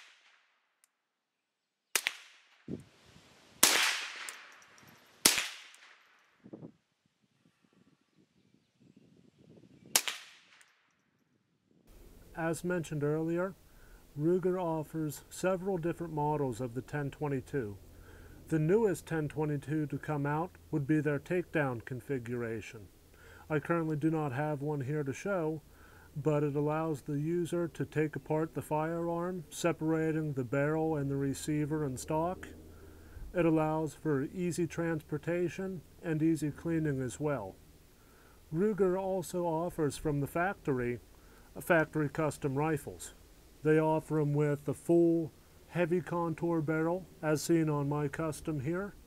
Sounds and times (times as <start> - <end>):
Outside, rural or natural: 0.0 - 49.0.